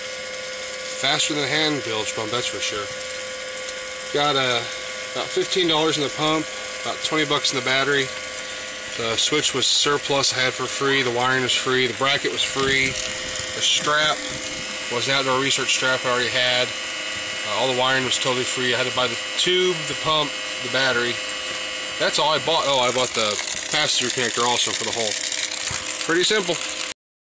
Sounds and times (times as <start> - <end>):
Pump (liquid): 0.0 - 27.0.